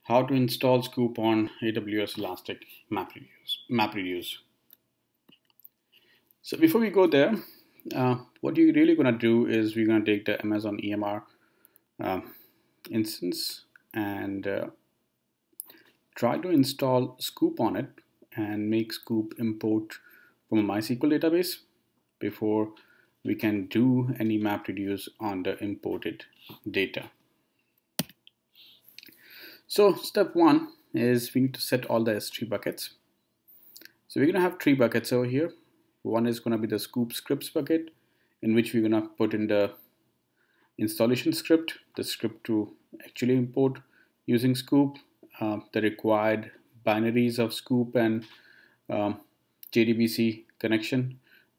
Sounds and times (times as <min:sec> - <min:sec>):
Speech: 0:00.0 - 0:04.5, 0:06.4 - 0:11.3, 0:12.0 - 0:14.8, 0:16.2 - 0:27.2, 0:29.7 - 0:33.0, 0:34.1 - 0:39.8, 0:40.8 - 0:48.3, 0:48.9 - 0:51.2.